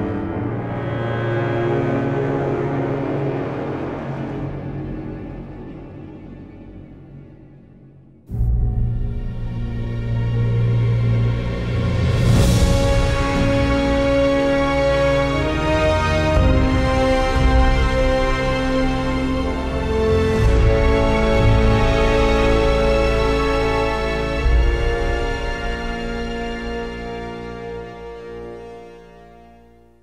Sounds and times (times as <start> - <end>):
Music: 0.0 - 30.0.